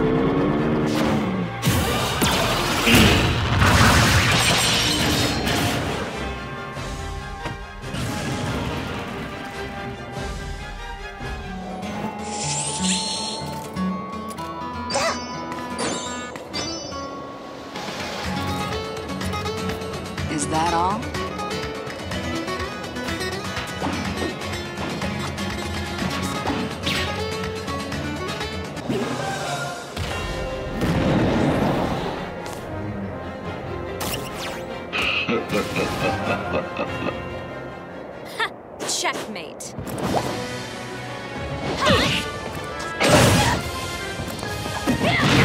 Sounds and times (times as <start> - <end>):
Music: 0.0 - 45.4
Smash, crash: 1.6 - 6.1.